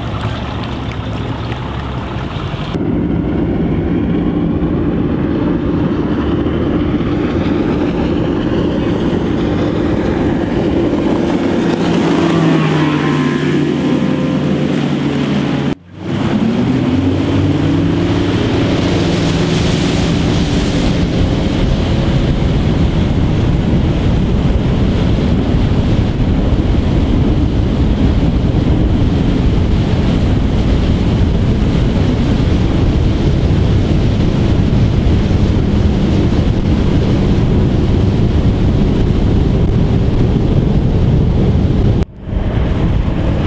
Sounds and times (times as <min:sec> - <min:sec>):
Motorboat, speedboat: 0:00.0 - 0:43.4.